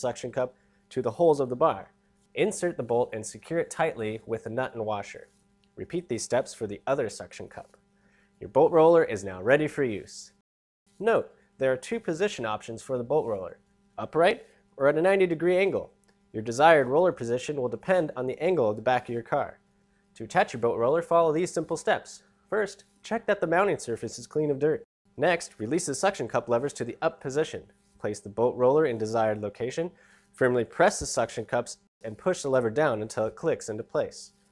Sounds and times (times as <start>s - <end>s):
Speech: 0.0s - 7.8s, 8.4s - 10.4s, 11.0s - 19.6s, 20.2s - 34.4s.